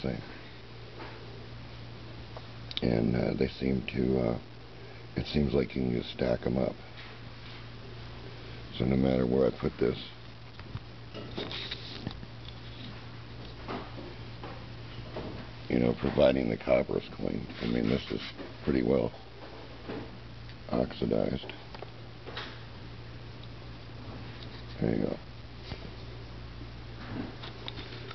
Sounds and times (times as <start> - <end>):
Speech: 0.0 - 0.4, 2.8 - 4.5, 5.2 - 6.8, 8.7 - 10.2, 15.7 - 19.2, 20.7 - 21.6, 24.8 - 25.3
Inside, small room: 0.0 - 28.1.